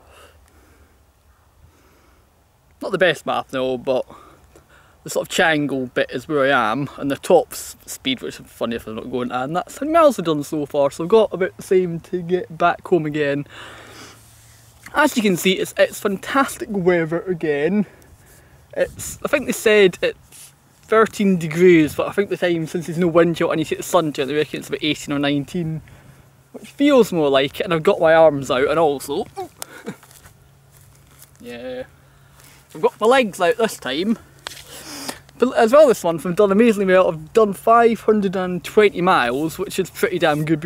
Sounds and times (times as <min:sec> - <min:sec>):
Speech: 0:02.8 - 0:04.1, 0:05.1 - 0:13.5, 0:14.9 - 0:17.9, 0:18.8 - 0:20.2, 0:20.9 - 0:25.8, 0:26.6 - 0:29.5, 0:32.7 - 0:34.2, 0:35.4 - 0:40.6.